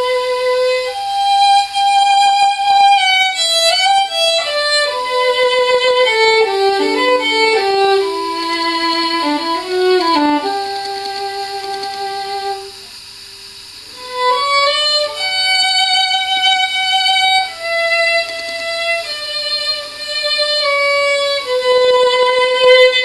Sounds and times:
Violin, fiddle: 0:00.0 - 0:12.7, 0:14.0 - 0:23.0.

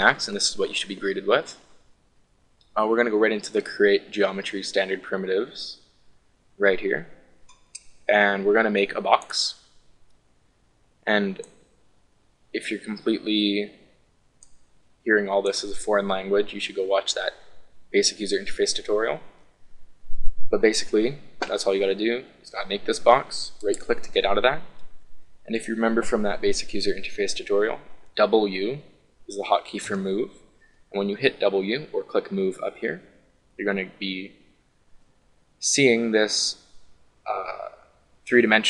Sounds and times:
Speech: 0:00.0 - 0:01.6, 0:02.7 - 0:05.8, 0:06.6 - 0:07.2, 0:08.1 - 0:09.6, 0:11.1 - 0:11.5, 0:12.6 - 0:13.8, 0:15.1 - 0:19.3, 0:20.5 - 0:24.8, 0:25.5 - 0:34.4, 0:35.6 - 0:36.6, 0:37.3 - 0:38.6.

